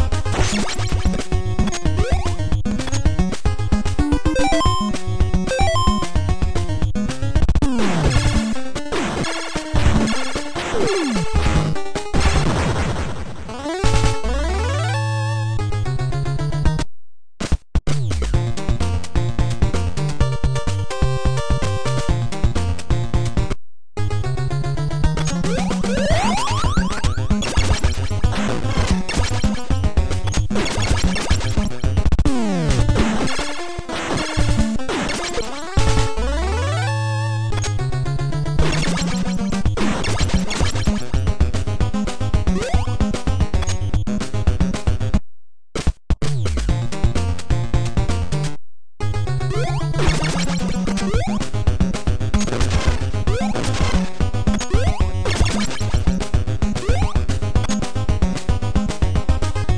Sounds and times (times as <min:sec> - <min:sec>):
Music: 0:00.0 - 0:12.6, 0:13.6 - 0:16.9, 0:17.9 - 0:45.2, 0:46.2 - 0:59.7.